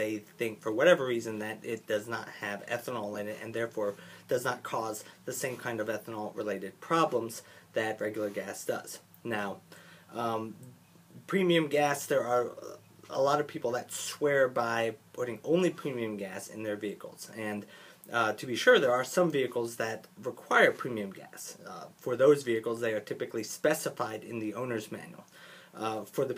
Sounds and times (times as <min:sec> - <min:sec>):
Speech: 0:00.0 - 0:26.3.